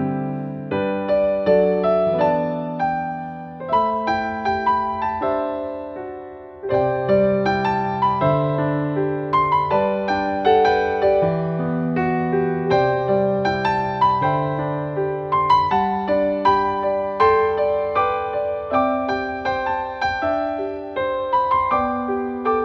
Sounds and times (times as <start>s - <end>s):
Music: 0.0s - 22.6s.